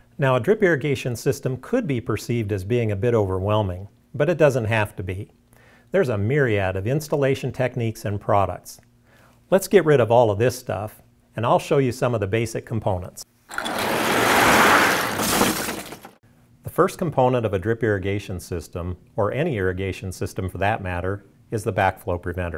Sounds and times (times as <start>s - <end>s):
Speech: 0.2s - 8.8s, 9.5s - 13.3s, 16.6s - 22.5s.